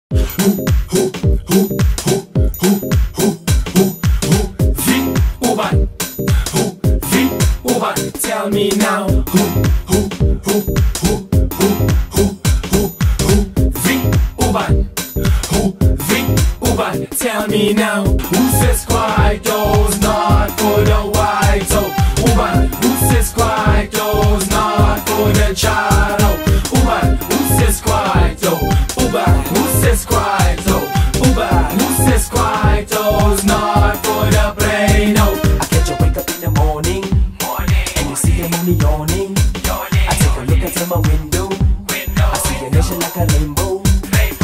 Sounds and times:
Afrobeat: 0:00.1 - 0:44.4.

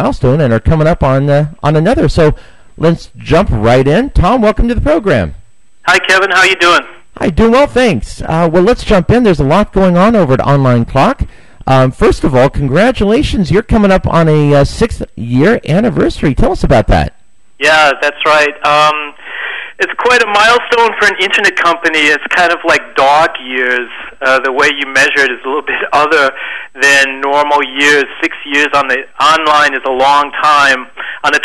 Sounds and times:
Speech: 0:00.0 - 0:19.2, 0:19.8 - 0:31.4.

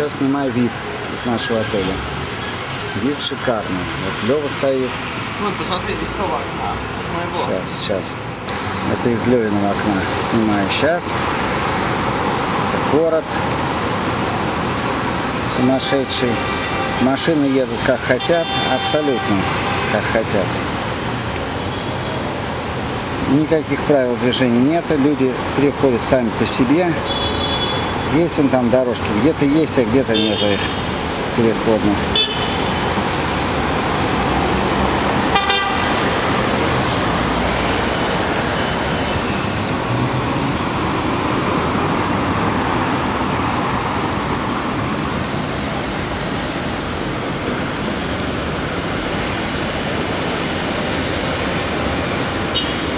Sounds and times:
Traffic noise, roadway noise: 0:00.0 - 0:52.9.

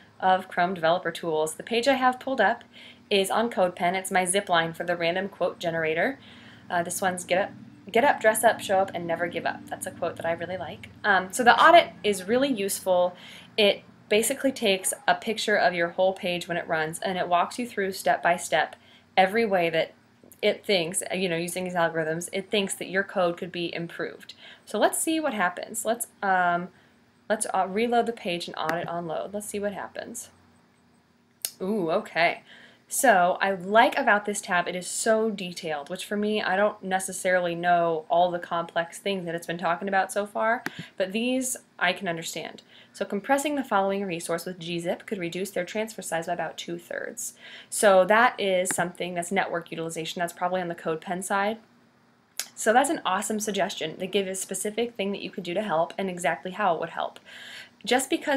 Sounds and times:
Speech: 0:00.2 - 0:26.7, 0:27.3 - 0:30.3, 0:31.5 - 0:51.6, 0:52.4 - 0:57.2, 0:57.8 - 0:58.3.

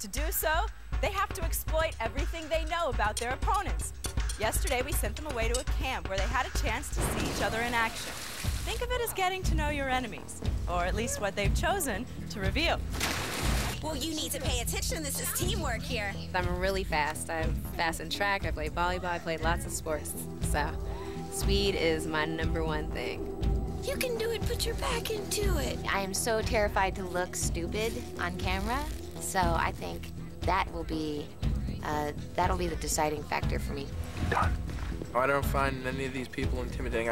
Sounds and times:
Music: 0:00.0 - 0:37.1.

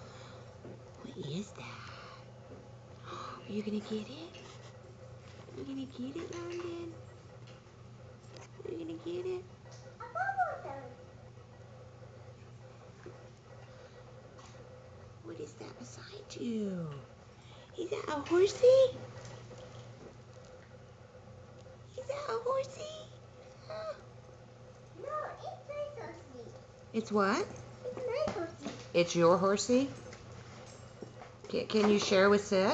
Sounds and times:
Inside, small room: 0:00.0 - 0:32.7
Child speech, kid speaking: 0:10.0 - 0:11.0, 0:25.0 - 0:26.6, 0:27.8 - 0:28.8.

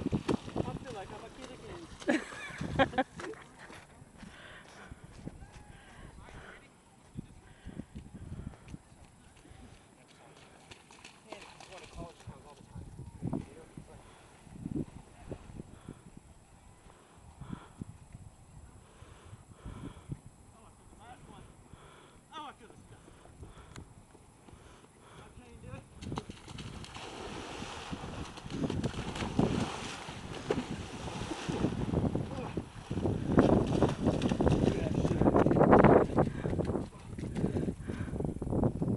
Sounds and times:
Run: 0:01.4 - 0:06.0, 0:07.0 - 0:12.8, 0:26.0 - 0:27.0, 0:33.0 - 0:38.2.

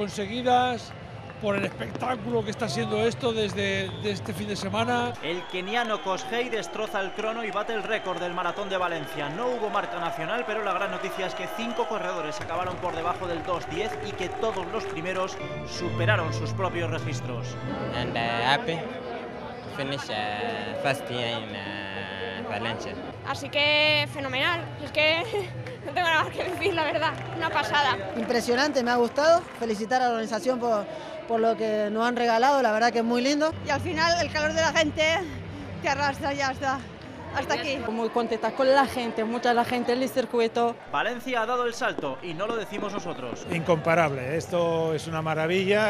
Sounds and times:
Outside, urban or manmade: 0:00.0 - 0:45.8.

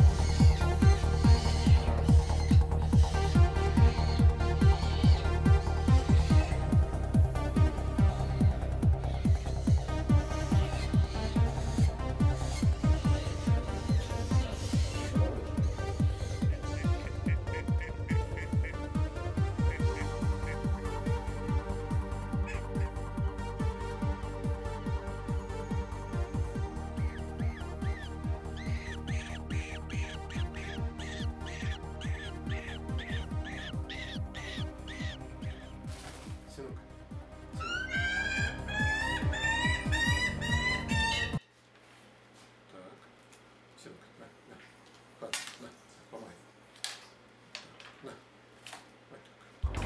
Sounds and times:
Music: 0:00.0 - 0:41.4, 0:49.6 - 0:49.8.

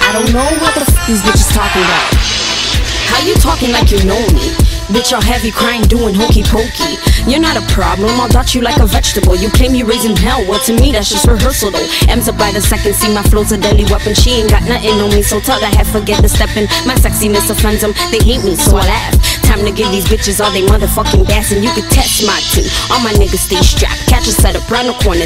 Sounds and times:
Music of Africa: 0:00.0 - 0:25.2.

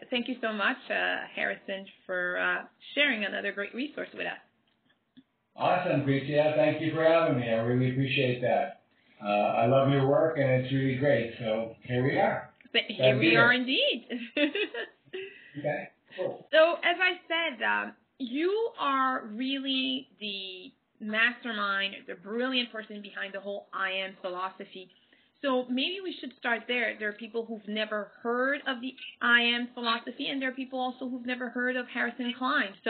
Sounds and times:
Speech: 0:00.0 - 0:04.4, 0:05.6 - 0:32.8
Inside, small room: 0:00.0 - 0:32.8.

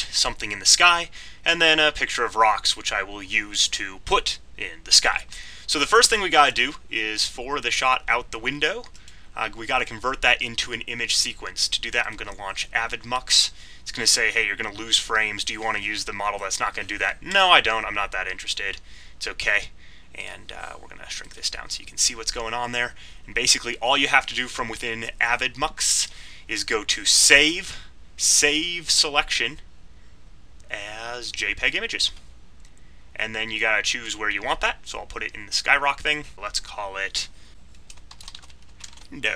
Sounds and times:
Speech: 0:00.0 - 0:29.6, 0:30.7 - 0:32.2, 0:33.2 - 0:37.4, 0:39.1 - 0:39.3.

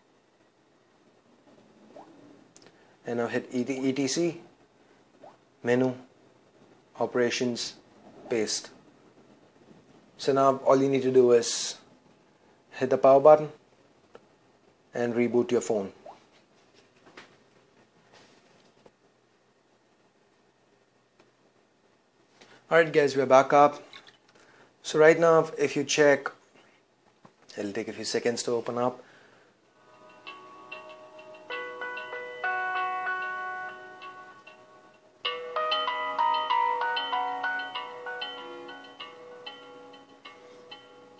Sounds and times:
Speech: 0:03.0 - 0:04.5, 0:05.6 - 0:06.1, 0:07.0 - 0:08.8, 0:10.2 - 0:11.9, 0:12.7 - 0:13.6, 0:14.9 - 0:16.0, 0:22.7 - 0:23.8, 0:24.8 - 0:26.4, 0:27.5 - 0:29.0
Music: 0:29.8 - 0:41.1.

